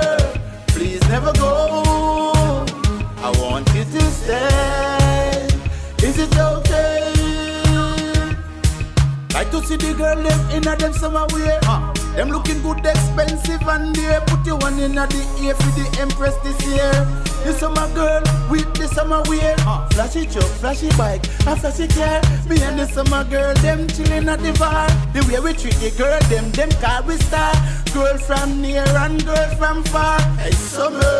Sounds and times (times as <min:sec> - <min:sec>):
Soundtrack music: 0:00.0 - 0:31.1.